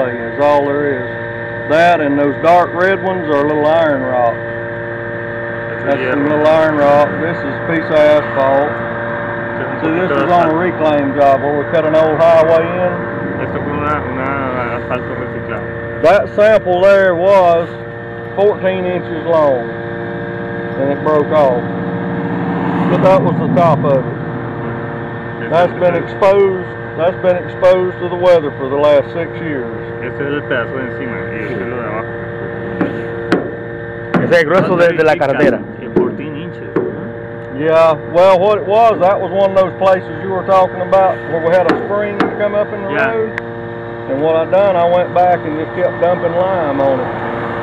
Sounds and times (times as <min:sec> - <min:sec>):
Speech: 0:00.0 - 0:01.0, 0:01.7 - 0:04.4, 0:05.8 - 0:08.8, 0:09.6 - 0:17.8, 0:18.4 - 0:19.7, 0:20.8 - 0:21.6, 0:22.9 - 0:24.1, 0:25.4 - 0:32.1, 0:34.2 - 0:36.8, 0:37.6 - 0:43.3, 0:44.1 - 0:47.1.